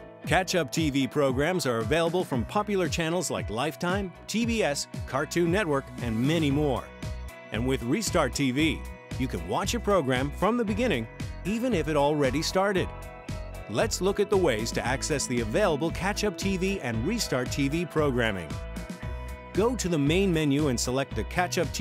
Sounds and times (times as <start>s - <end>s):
Music: 0.0s - 21.8s
Speech: 0.3s - 6.9s, 7.5s - 12.9s, 13.7s - 18.5s, 19.6s - 21.8s.